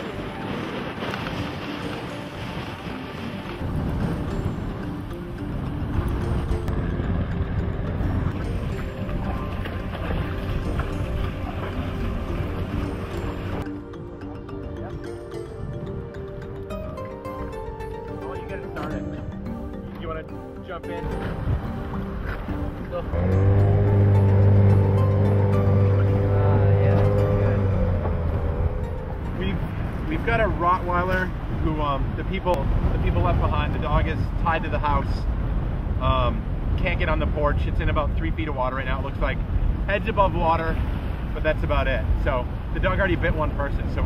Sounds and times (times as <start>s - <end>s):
Music: 0.0s - 31.1s.